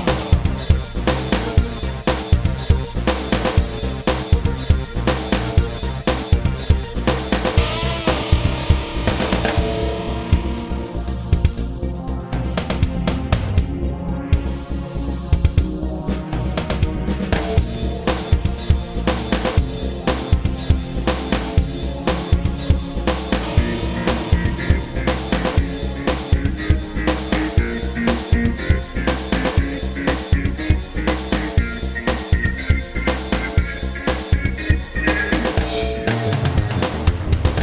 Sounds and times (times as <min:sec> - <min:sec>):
Music: 0:00.0 - 0:37.6.